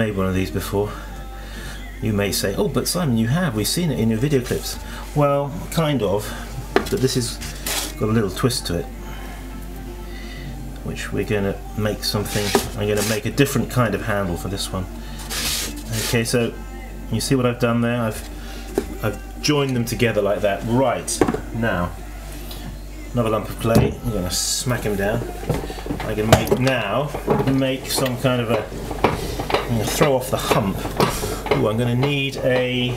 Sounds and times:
Speech: 0:00.0 - 0:01.0, 0:02.0 - 0:07.4, 0:08.0 - 0:08.9, 0:10.8 - 0:14.9, 0:15.9 - 0:18.2, 0:19.0 - 0:22.0, 0:23.2 - 0:25.2, 0:26.0 - 0:28.7, 0:29.7 - 0:30.8, 0:31.5 - 0:32.9
Music: 0:00.0 - 0:32.9.

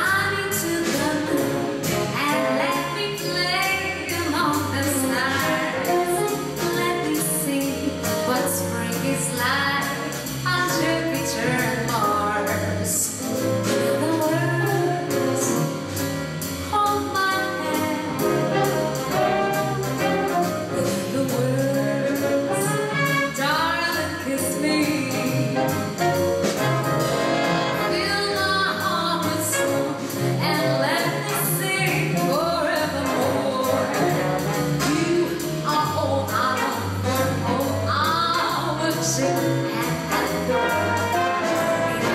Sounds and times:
Jazz: 0:00.0 - 0:42.1.

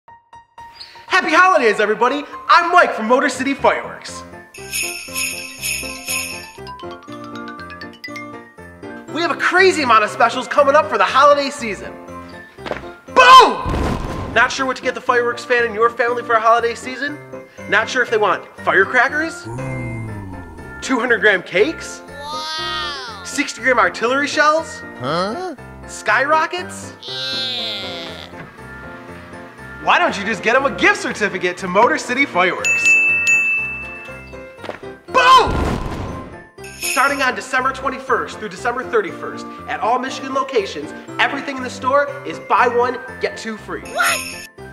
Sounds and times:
Music: 0:00.1 - 0:44.7
Speech: 0:01.1 - 0:04.2, 0:09.1 - 0:11.9, 0:14.4 - 0:26.9, 0:29.8 - 0:32.6, 0:37.0 - 0:44.2.

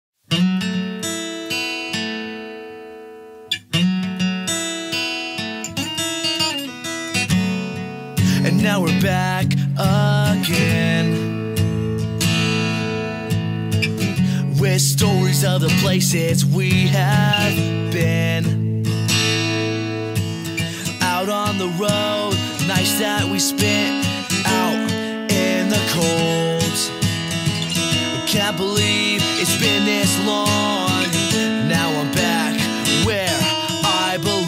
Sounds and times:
Strum: 0:05.7 - 0:34.4.

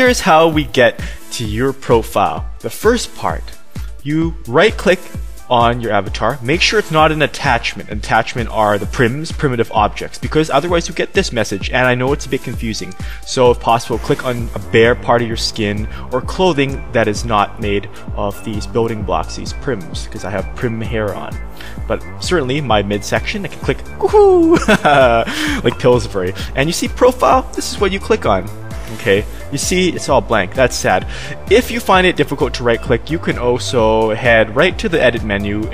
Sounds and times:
Music: 0:00.0 - 0:35.7
Speech: 0:00.0 - 0:35.7.

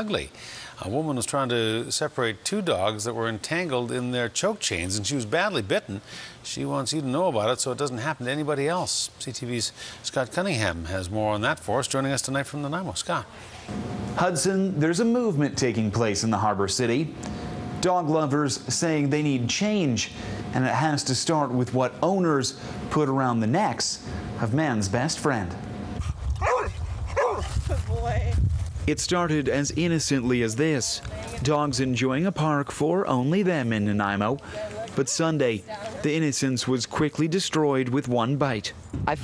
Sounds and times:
Speech: 0:00.0 - 0:13.3, 0:14.2 - 0:17.1, 0:17.8 - 0:25.6, 0:27.7 - 0:39.2
Bow-wow: 0:26.4 - 0:27.5
Yip: 0:26.4 - 0:27.5.

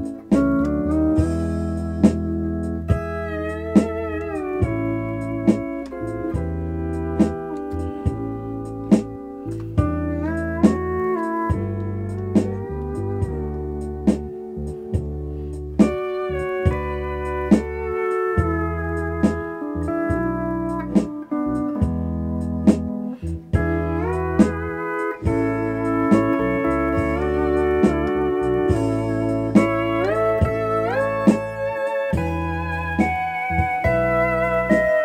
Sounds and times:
Steel guitar, slide guitar: 0:00.0 - 0:35.0.

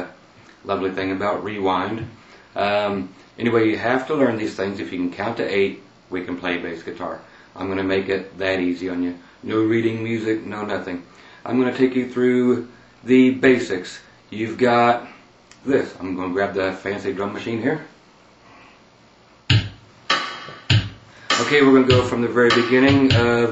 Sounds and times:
Speech: 0:00.0 - 0:18.0, 0:21.4 - 0:23.5
Music: 0:19.5 - 0:23.5.

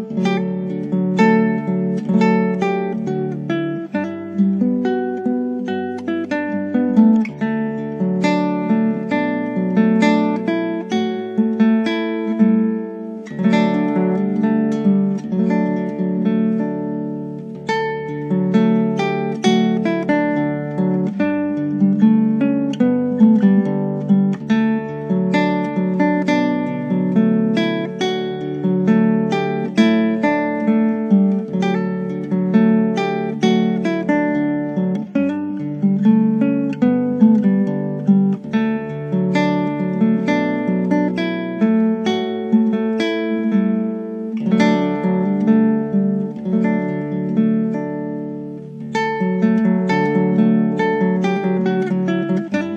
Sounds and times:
Acoustic guitar: 0:00.0 - 0:52.7
Strum: 0:00.0 - 0:52.7.

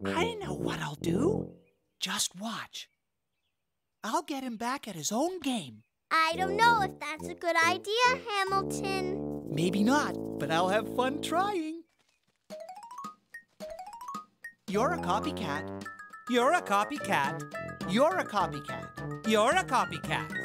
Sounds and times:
Speech: 0:00.0 - 0:01.4, 0:04.0 - 0:11.8, 0:14.7 - 0:15.7, 0:16.3 - 0:20.4
Music: 0:00.0 - 0:01.6, 0:06.2 - 0:11.6, 0:12.5 - 0:20.4.

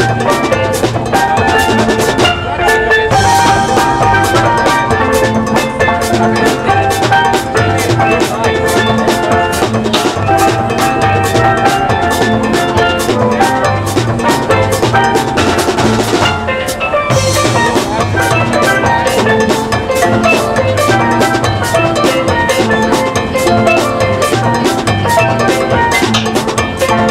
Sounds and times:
Music: 0:00.0 - 0:27.1.

